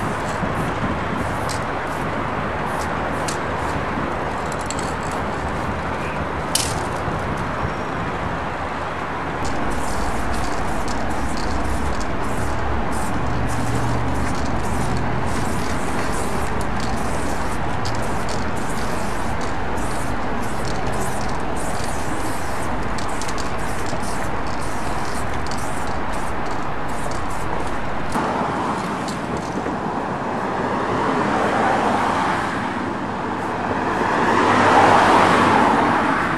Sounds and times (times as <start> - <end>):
Spray: 0.0 - 3.8, 9.4 - 28.2.